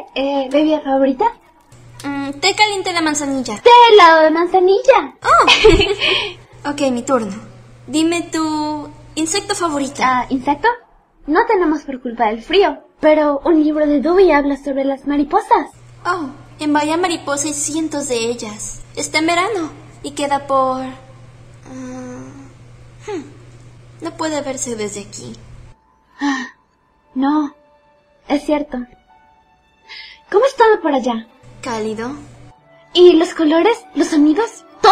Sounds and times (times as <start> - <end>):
Speech: 0.0 - 5.9, 6.6 - 21.1, 24.0 - 25.4, 30.3 - 32.3, 33.0 - 34.9
Music: 0.0 - 10.7, 15.7 - 22.4, 24.0 - 34.9.